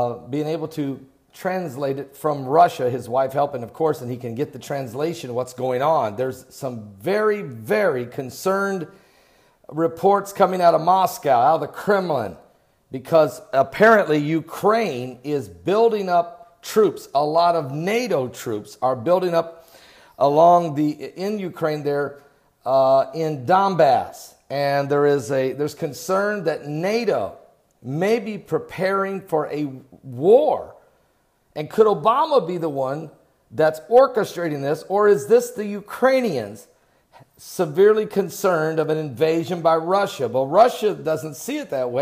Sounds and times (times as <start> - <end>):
Speech: 0.0 - 8.9, 9.7 - 19.6, 20.2 - 30.8, 31.6 - 36.7, 37.4 - 42.0.